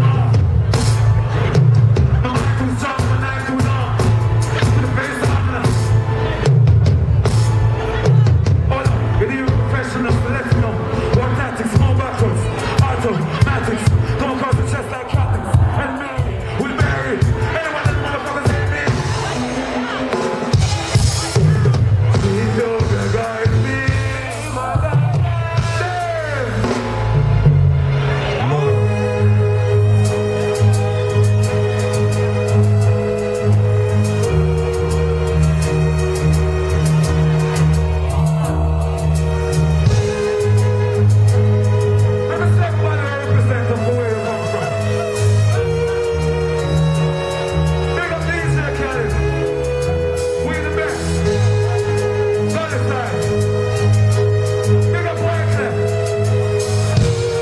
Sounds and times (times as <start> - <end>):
Speech: 2.2 - 6.5, 7.8 - 20.2, 42.3 - 45.1, 47.9 - 49.2, 50.4 - 51.4, 52.5 - 53.4, 54.8 - 55.9.